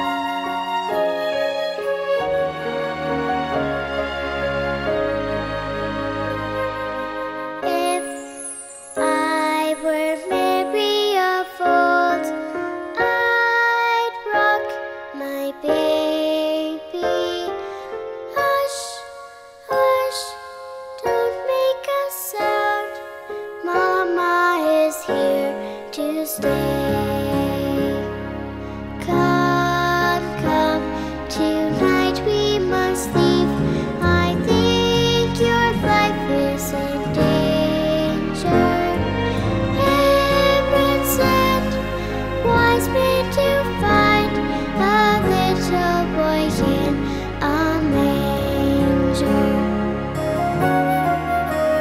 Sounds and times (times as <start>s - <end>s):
Lullaby: 0.0s - 51.8s.